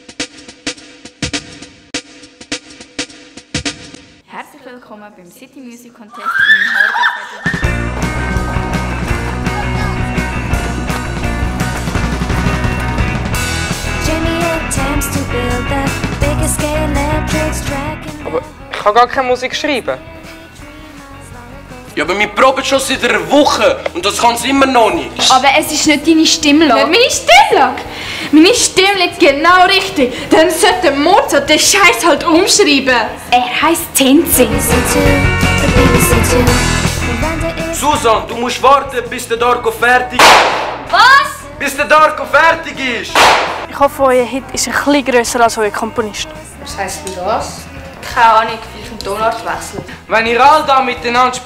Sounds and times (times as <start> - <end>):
Music: 0.0 - 6.0, 7.2 - 51.4.